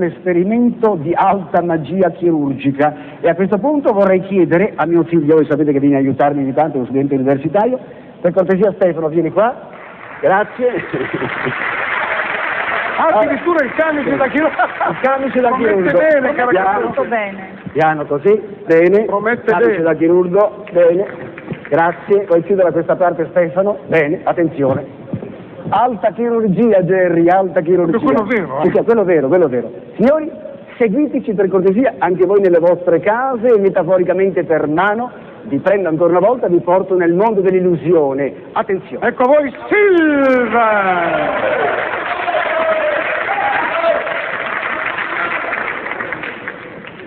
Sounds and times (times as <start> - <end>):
Speech: 25.7 - 41.4.